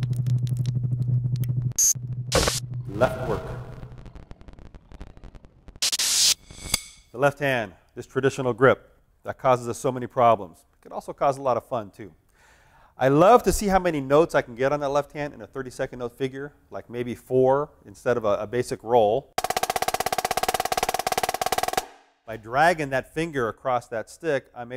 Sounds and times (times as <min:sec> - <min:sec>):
Speech: 0:02.9 - 0:03.6, 0:07.2 - 0:12.2, 0:13.0 - 0:19.3, 0:22.3 - 0:24.7.